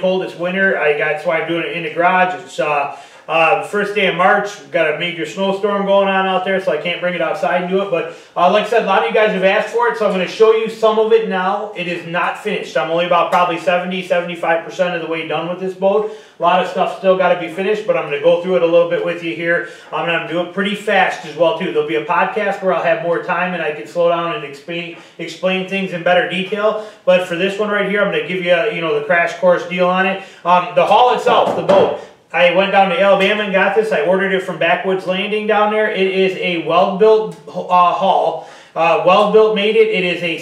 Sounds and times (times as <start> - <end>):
Speech: 0.0 - 40.4.